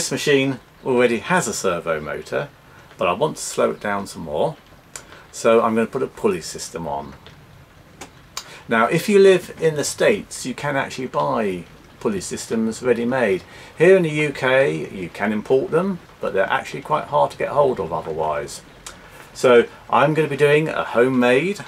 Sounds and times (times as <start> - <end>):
Speech: 0.0 - 4.6, 5.3 - 7.3, 8.7 - 18.7, 19.4 - 21.6.